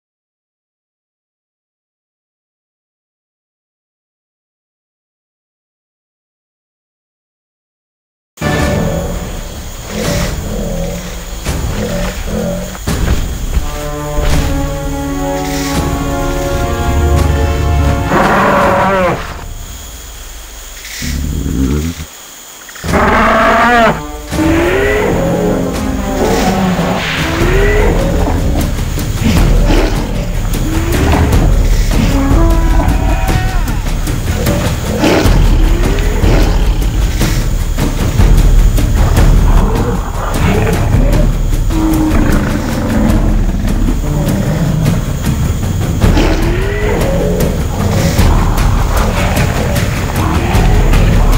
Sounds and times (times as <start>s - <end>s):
Music: 8.4s - 51.3s.